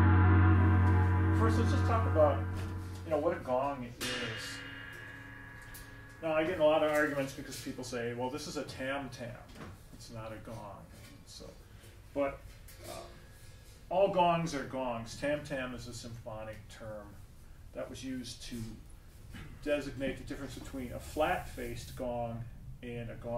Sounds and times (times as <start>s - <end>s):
Speech: 1.4s - 2.5s, 3.1s - 4.6s, 6.2s - 11.6s, 12.2s - 13.1s, 13.9s - 17.2s, 17.8s - 23.3s.